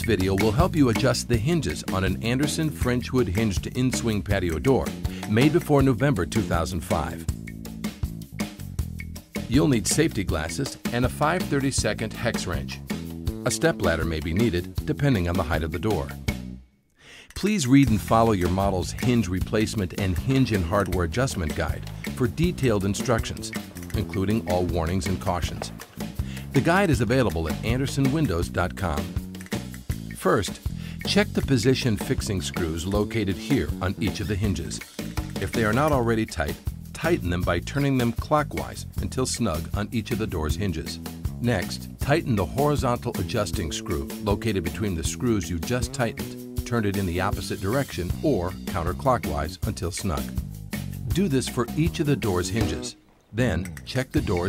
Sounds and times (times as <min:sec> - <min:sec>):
Speech: 0:00.0 - 0:07.3, 0:09.5 - 0:12.8, 0:13.4 - 0:16.2, 0:17.3 - 0:25.8, 0:26.5 - 0:29.2, 0:30.2 - 0:34.8, 0:35.4 - 0:50.3, 0:51.0 - 0:54.4
Music: 0:00.0 - 0:54.4.